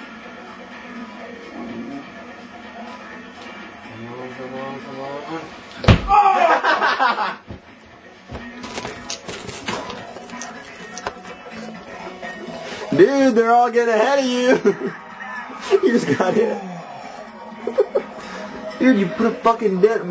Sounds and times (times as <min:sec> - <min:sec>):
Music: 0:00.0 - 0:20.1.